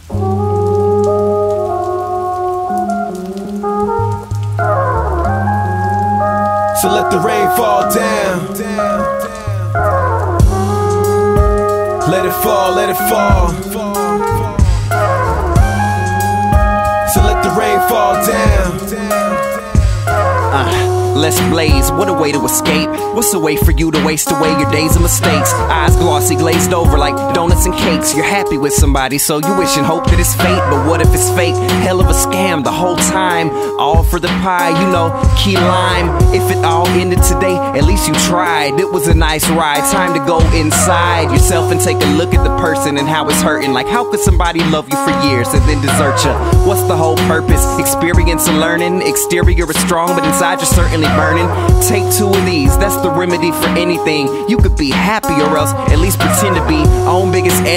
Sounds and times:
Music: 0:00.0 - 0:57.7.

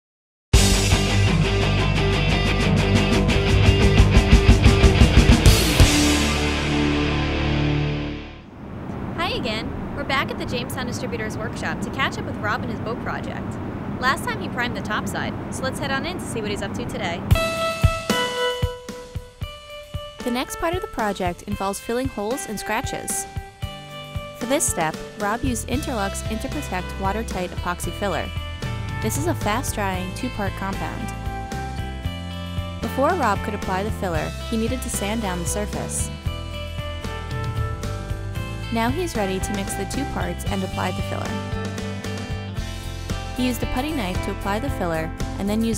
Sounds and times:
Music: 0:00.6 - 0:08.5, 0:16.6 - 0:45.7
Speech: 0:09.2 - 0:17.2, 0:20.2 - 0:23.2, 0:24.4 - 0:28.3, 0:29.0 - 0:31.1, 0:32.8 - 0:36.1, 0:38.7 - 0:41.4, 0:43.4 - 0:45.7.

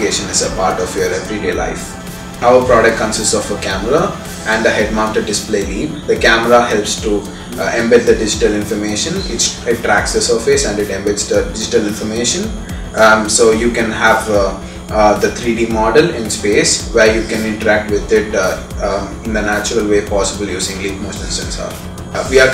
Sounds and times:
Music: 0:00.0 - 0:22.5
Speech: 0:00.0 - 0:22.5.

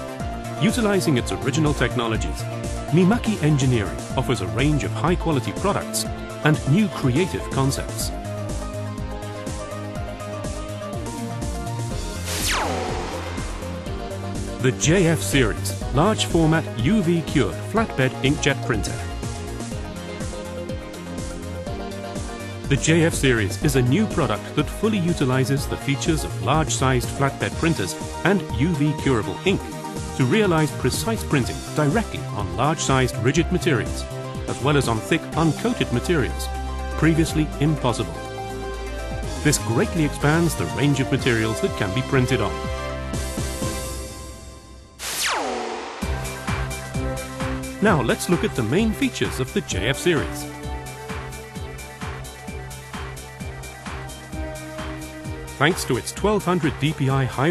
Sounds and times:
Music: 0:00.0 - 0:57.5
Speech: 0:00.6 - 0:08.2, 0:14.6 - 0:19.1, 0:22.7 - 0:38.2, 0:39.4 - 0:42.6, 0:47.8 - 0:50.5, 0:55.6 - 0:57.5.

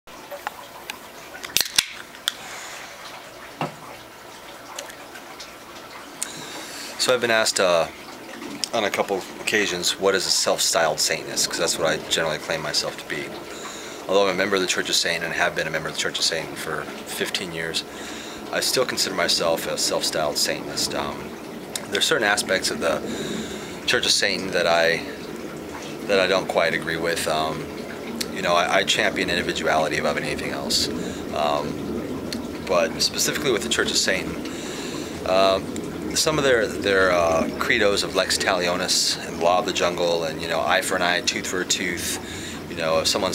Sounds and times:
Sink (filling or washing): 0:00.1 - 0:43.3
Water: 0:00.1 - 0:43.3
Water tap, faucet: 0:00.1 - 0:43.3.

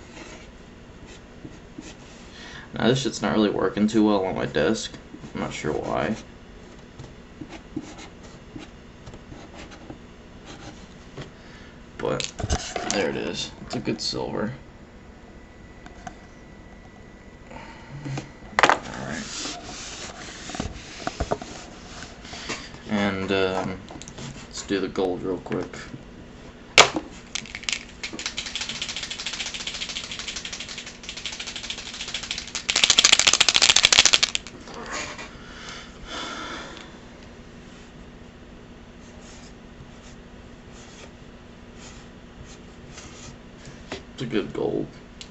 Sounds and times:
Speech: 0:02.8 - 0:06.2, 0:12.0 - 0:14.6, 0:22.9 - 0:23.8, 0:24.5 - 0:26.0, 0:44.2 - 0:45.0.

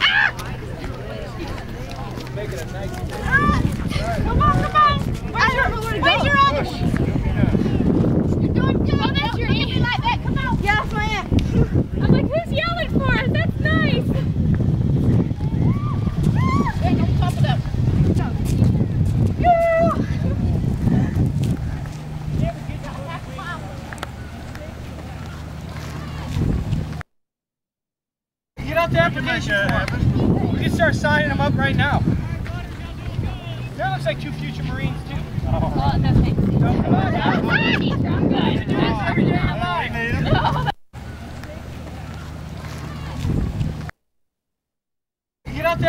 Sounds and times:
Run: 0:00.0 - 0:27.0, 0:28.6 - 0:43.9.

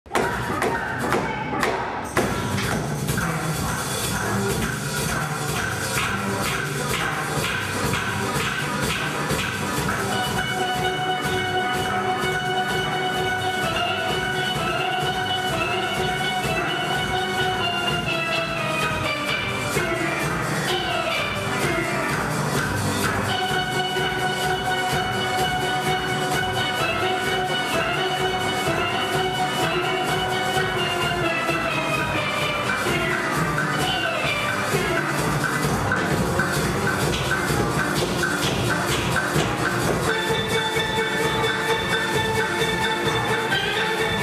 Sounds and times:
Music: 0:00.1 - 0:44.2.

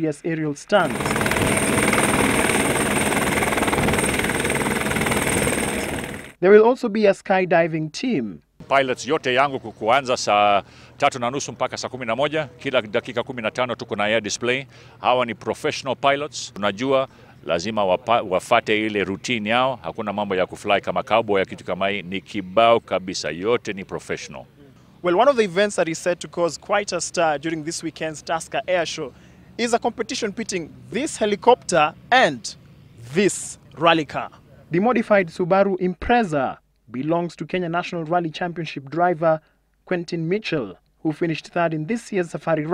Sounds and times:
Speech: 0:00.0 - 0:00.9, 0:06.4 - 0:42.7.

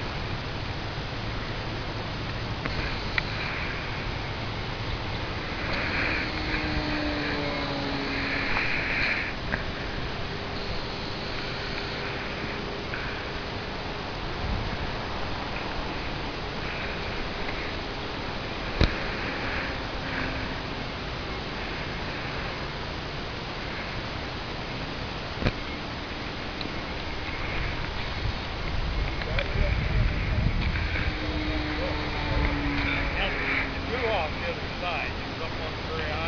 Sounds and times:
Fixed-wing aircraft, airplane: 0:00.0 - 0:36.2.

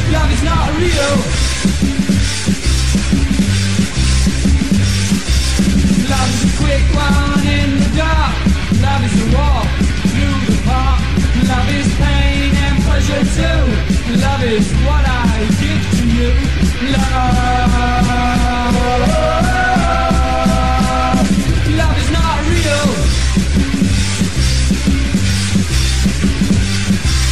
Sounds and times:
Punk rock: 0:00.0 - 0:27.3.

